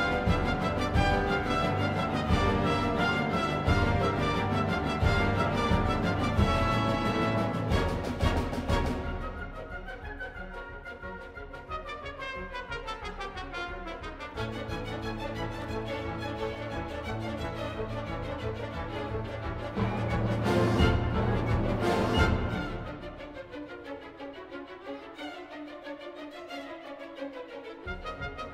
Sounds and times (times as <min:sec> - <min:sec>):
Orchestra: 0:00.0 - 0:28.5.